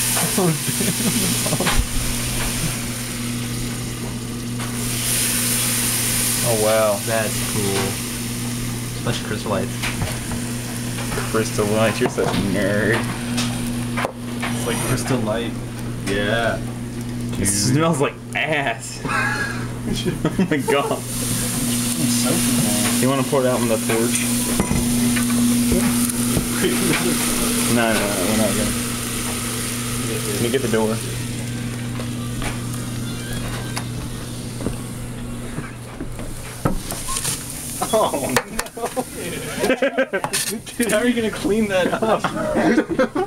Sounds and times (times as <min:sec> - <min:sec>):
Speech: 0:06.4 - 0:08.0, 0:09.0 - 0:09.7, 0:11.3 - 0:13.1, 0:14.6 - 0:16.6, 0:22.0 - 0:24.3, 0:27.7 - 0:28.8, 0:30.0 - 0:31.2, 0:39.2 - 0:42.6.